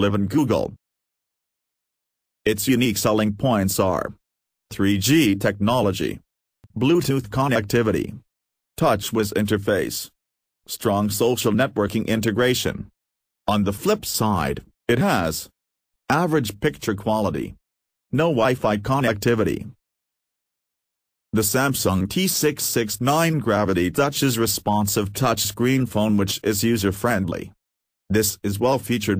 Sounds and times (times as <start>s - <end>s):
Speech: 0.0s - 0.8s, 2.5s - 12.9s, 13.5s - 19.8s, 21.4s - 29.1s.